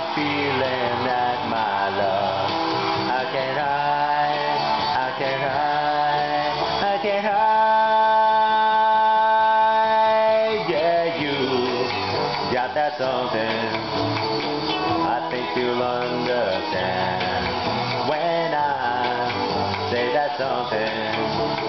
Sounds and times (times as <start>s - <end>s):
Inside, large room or hall: 0.0s - 21.6s
Music: 0.0s - 21.6s
Singing: 0.0s - 21.6s.